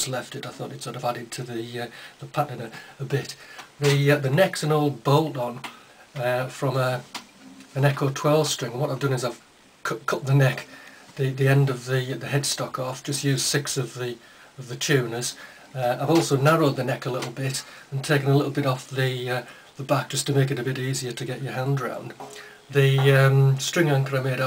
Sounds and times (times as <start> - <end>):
Speech: 0.0 - 7.1, 7.7 - 24.4.